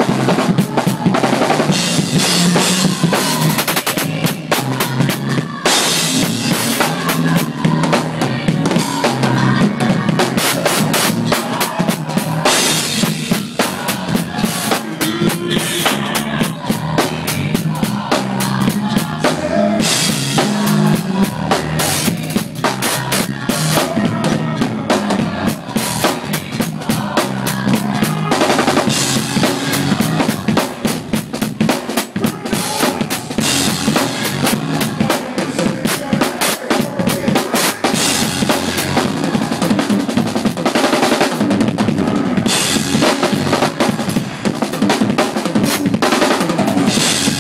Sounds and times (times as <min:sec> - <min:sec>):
Music: 0:00.0 - 0:47.4.